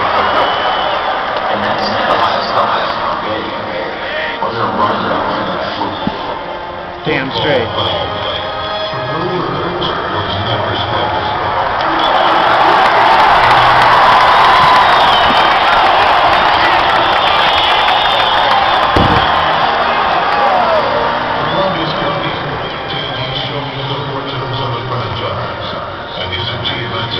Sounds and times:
Music: 0.0s - 27.1s
Speech: 1.5s - 6.3s, 7.0s - 11.4s, 21.4s - 27.1s.

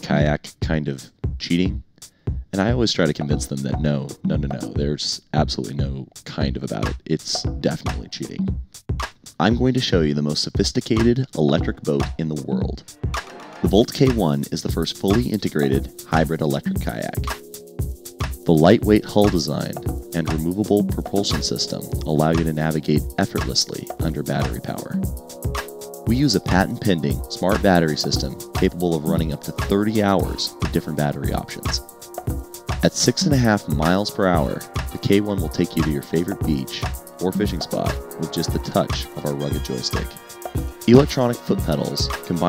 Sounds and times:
Speech: 0.0s - 1.8s, 2.5s - 8.5s, 9.4s - 12.8s, 13.6s - 17.4s, 18.4s - 25.0s, 26.1s - 31.9s, 32.8s - 40.2s, 40.9s - 42.4s
Music: 0.0s - 42.4s.

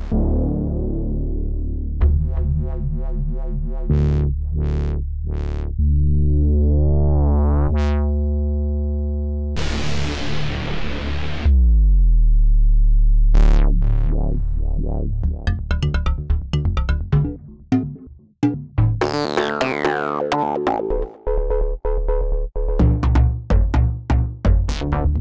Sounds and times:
Music: 0.0s - 25.2s.

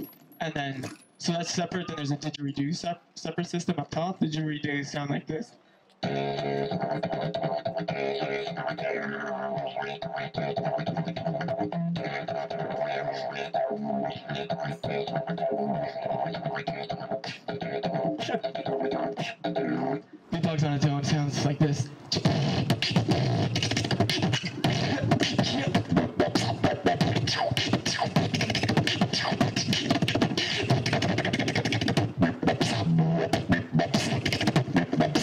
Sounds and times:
Beatboxing: 0.0s - 3.0s, 6.0s - 35.2s.

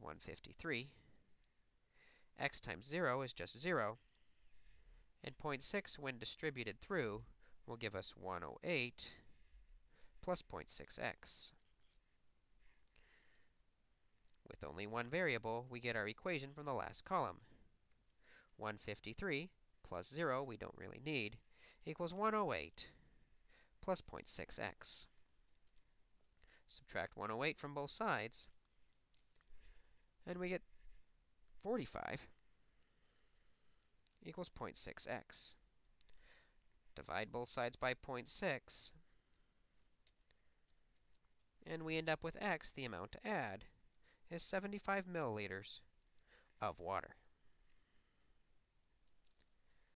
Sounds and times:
Speech: 0.0s - 1.0s, 2.4s - 4.0s, 5.2s - 9.3s, 10.2s - 11.6s, 14.4s - 17.5s, 18.6s - 23.0s, 23.8s - 25.1s, 26.7s - 28.6s, 30.2s - 30.6s, 31.6s - 32.4s, 34.2s - 35.6s, 37.0s - 39.0s, 41.6s - 43.7s, 44.3s - 45.9s, 46.6s - 47.3s.

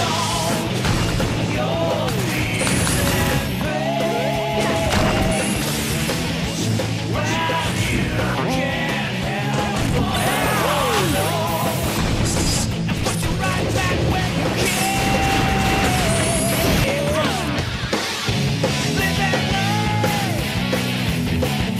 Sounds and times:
Music: 0.0s - 21.7s
Smash, crash: 4.7s - 6.2s, 11.8s - 16.9s.

